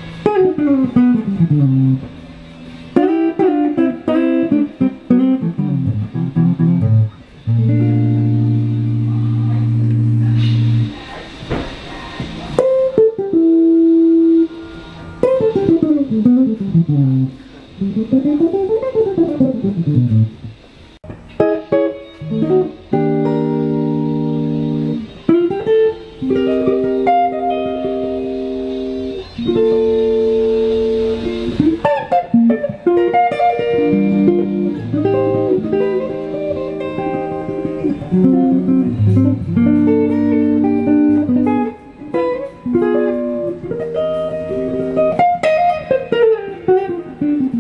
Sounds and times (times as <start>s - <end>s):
Music: 0.0s - 47.6s.